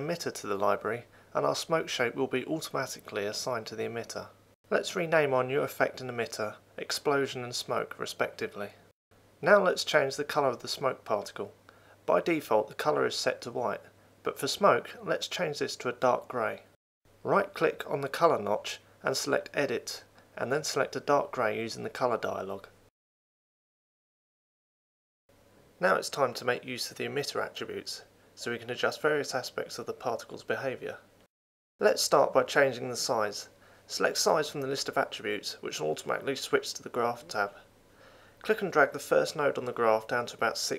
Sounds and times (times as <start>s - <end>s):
Speech: 0.0s - 8.8s, 9.4s - 22.8s, 25.8s - 31.1s, 31.8s - 37.7s, 38.4s - 40.7s.